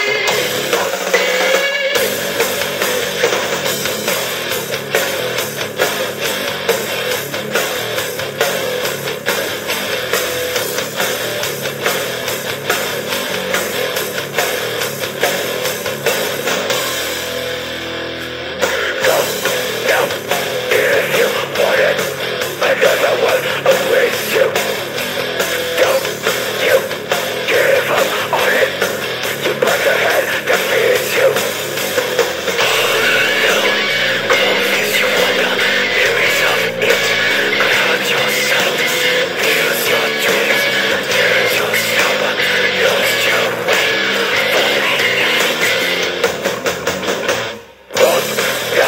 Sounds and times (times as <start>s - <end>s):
Music: 0.0s - 48.8s.